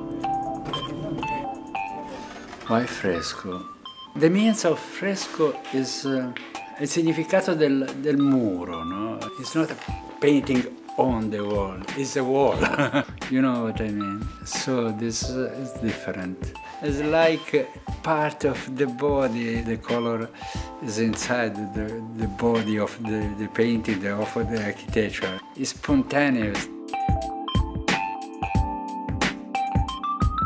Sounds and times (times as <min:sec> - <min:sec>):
Music: 0:00.0 - 0:30.4
Speech: 0:02.7 - 0:12.6, 0:13.3 - 0:26.7.